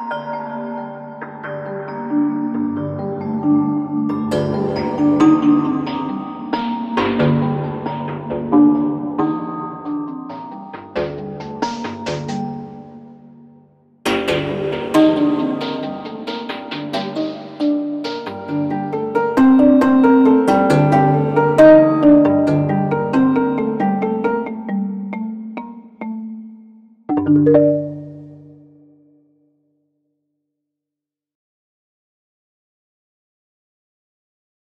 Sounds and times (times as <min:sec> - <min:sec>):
Music: 0:00.0 - 0:30.4.